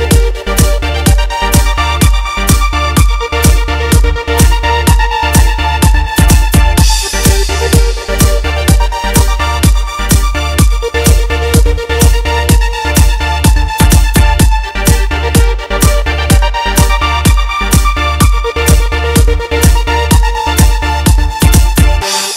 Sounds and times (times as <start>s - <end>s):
Dance music: 0.0s - 22.3s
House music: 0.0s - 22.3s.